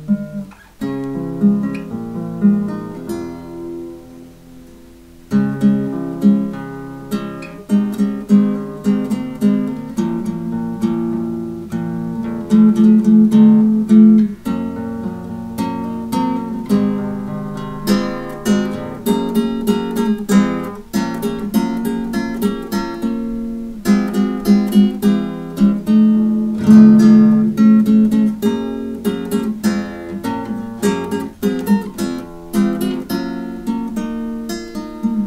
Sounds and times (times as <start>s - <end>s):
Acoustic guitar: 0.0s - 35.2s.